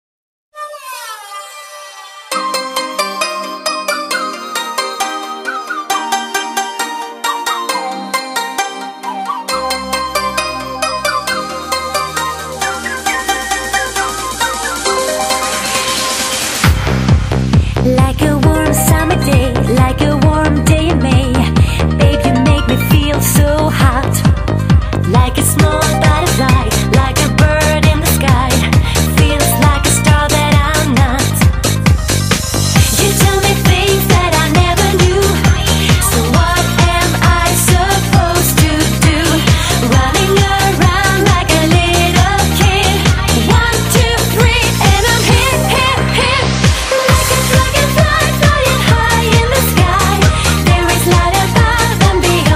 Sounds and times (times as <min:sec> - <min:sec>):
Music: 0:00.5 - 0:52.5.